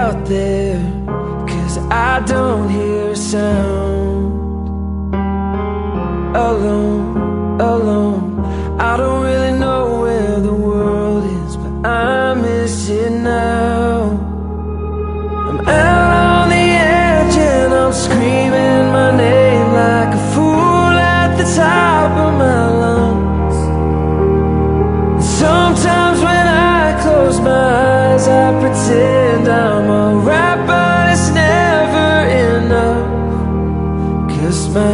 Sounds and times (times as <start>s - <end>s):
Music: 0.0s - 34.9s.